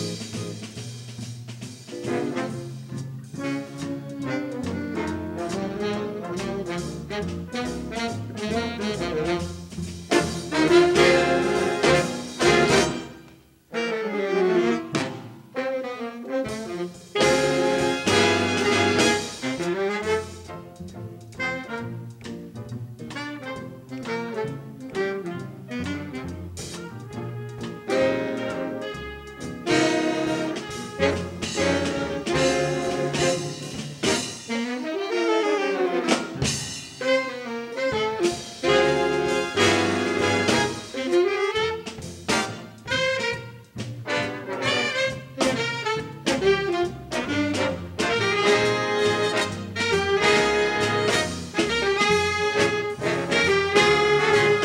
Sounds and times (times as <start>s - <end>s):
Trombone: 0.0s - 54.6s.